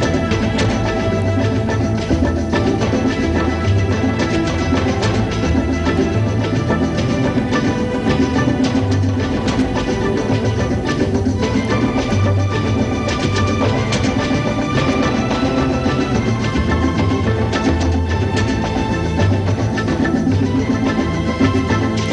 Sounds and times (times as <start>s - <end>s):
Dance music: 0.0s - 22.1s.